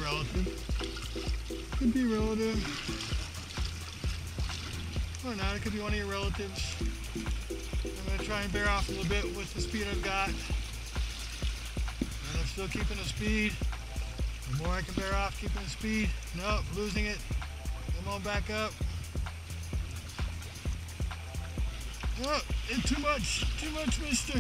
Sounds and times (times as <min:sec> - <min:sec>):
Speech: 0:00.0 - 0:00.5, 0:01.8 - 0:02.8, 0:05.2 - 0:06.8, 0:08.0 - 0:10.5, 0:12.3 - 0:13.6, 0:14.5 - 0:17.3, 0:17.9 - 0:18.8, 0:22.2 - 0:24.4
Boat, Water vehicle: 0:00.0 - 0:24.4
Music: 0:00.0 - 0:24.4.